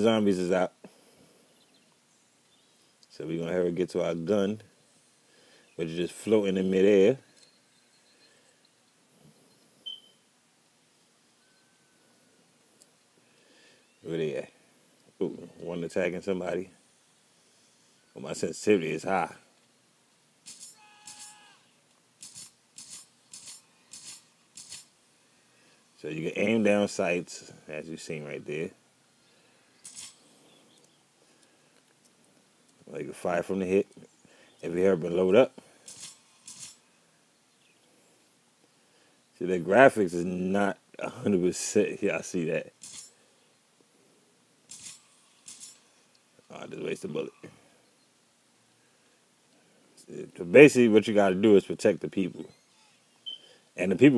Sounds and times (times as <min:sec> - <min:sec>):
Speech: 0:00.0 - 0:00.8, 0:03.1 - 0:04.6, 0:05.8 - 0:07.2, 0:14.0 - 0:14.5, 0:15.2 - 0:16.7, 0:18.2 - 0:19.4, 0:26.0 - 0:28.8, 0:32.9 - 0:34.0, 0:34.6 - 0:35.6, 0:39.4 - 0:42.7, 0:46.5 - 0:47.6, 0:50.0 - 0:52.5, 0:53.8 - 0:54.1.